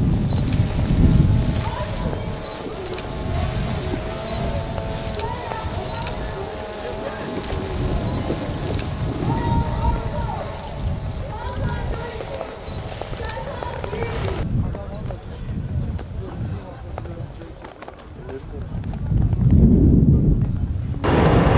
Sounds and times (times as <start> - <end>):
Speech: 4.3 - 21.0.